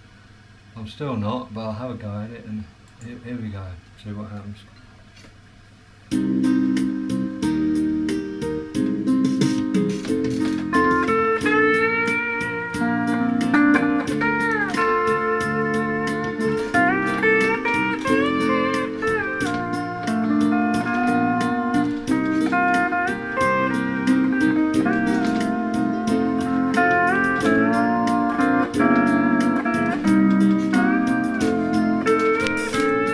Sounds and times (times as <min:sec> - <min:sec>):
Steel guitar, slide guitar: 0:09.6 - 0:33.1.